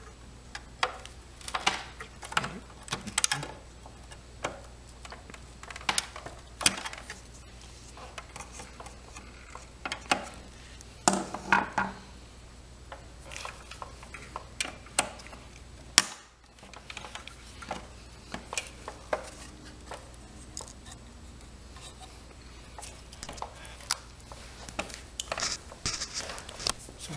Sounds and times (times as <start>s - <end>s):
Inside, small room: 0.0s - 27.1s.